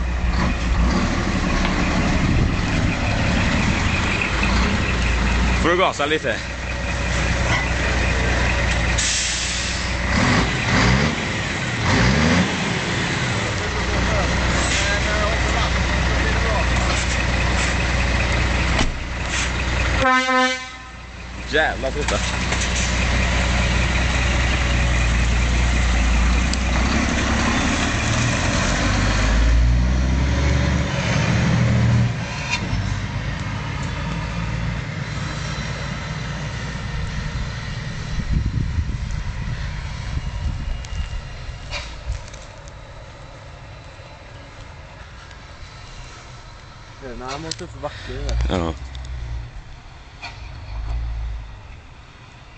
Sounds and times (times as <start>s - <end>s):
Speech: 5.6s - 6.5s, 13.6s - 17.0s, 21.5s - 22.3s, 47.0s - 48.8s.